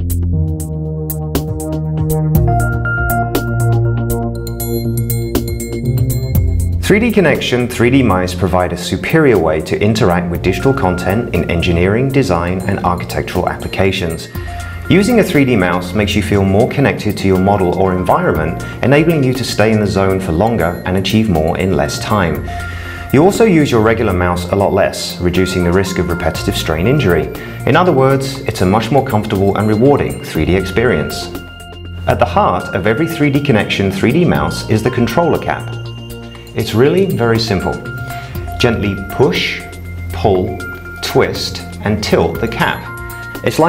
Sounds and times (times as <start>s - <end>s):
Music: 0.0s - 43.6s
Speech: 6.8s - 22.5s, 23.1s - 31.4s, 32.1s - 35.8s, 36.6s - 37.9s, 38.6s - 43.6s.